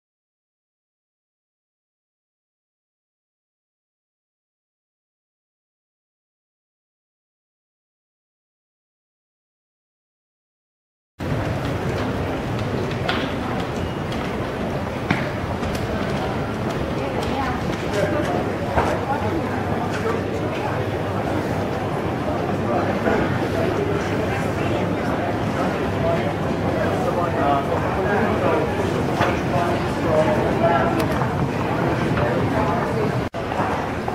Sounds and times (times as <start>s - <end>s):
Speech: 11.8s - 34.1s.